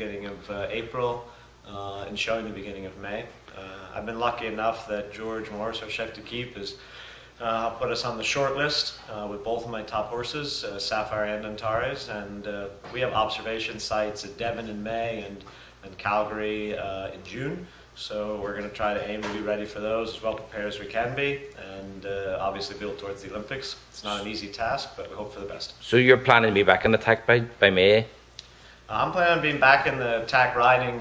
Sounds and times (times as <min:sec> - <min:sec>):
Speech: 0:00.0 - 0:06.8, 0:07.4 - 0:28.2, 0:28.9 - 0:31.0.